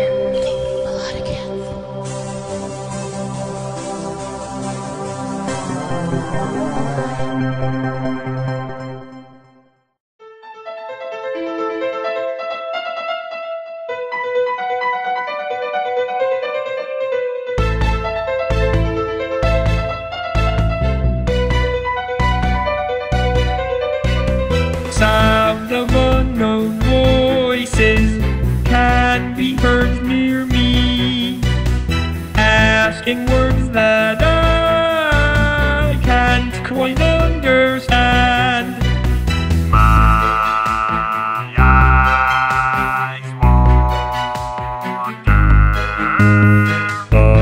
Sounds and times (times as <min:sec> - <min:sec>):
Music: 0:00.0 - 0:47.4.